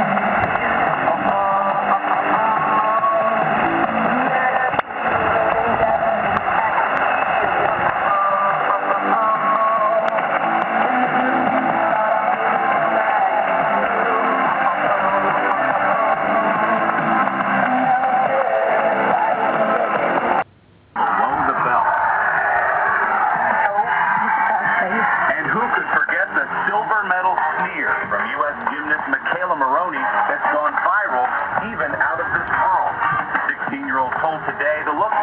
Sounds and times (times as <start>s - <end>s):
Radio: 0.0s - 35.2s.